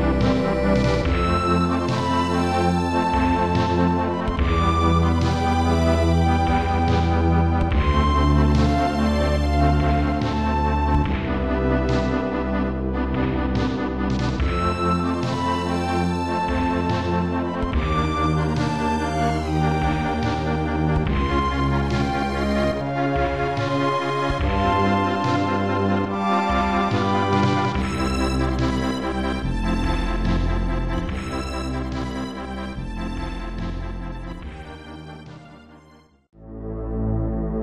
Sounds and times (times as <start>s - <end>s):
Video game music: 0.0s - 37.6s.